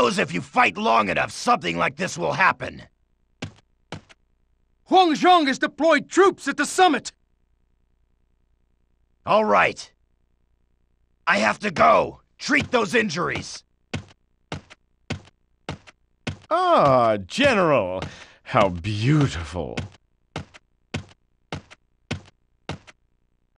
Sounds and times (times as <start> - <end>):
Speech: 0.0 - 2.9, 4.9 - 7.2, 9.2 - 10.0, 11.2 - 13.7, 16.5 - 20.0.